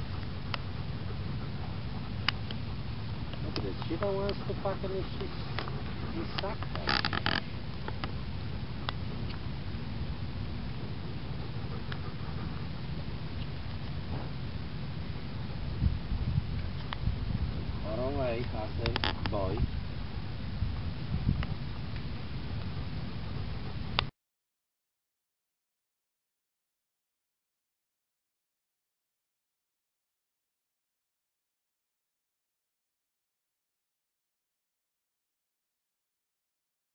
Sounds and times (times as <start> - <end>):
Outside, rural or natural: 0.0 - 24.2
Speech: 3.4 - 6.9, 17.8 - 19.7.